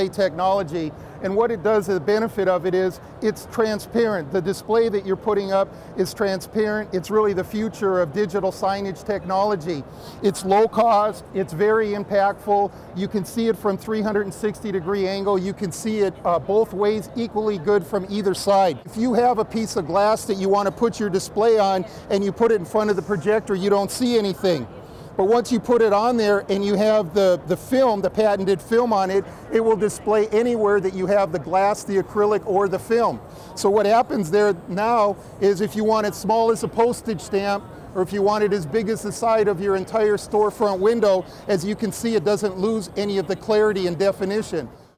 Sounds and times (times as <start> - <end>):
Speech: 0.0 - 44.7.